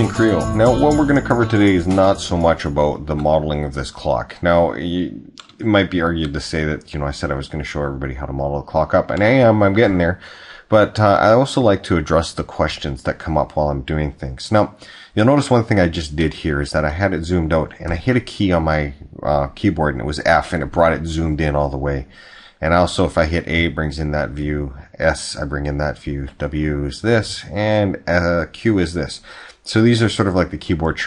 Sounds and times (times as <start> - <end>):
Speech: 0.0 - 31.0.